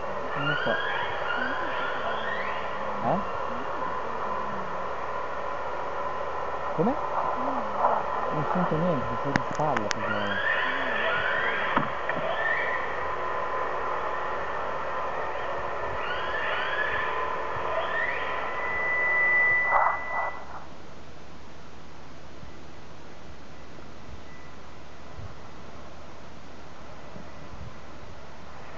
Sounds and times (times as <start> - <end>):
Speech: 0.3 - 1.8, 2.9 - 4.7, 6.8 - 11.2.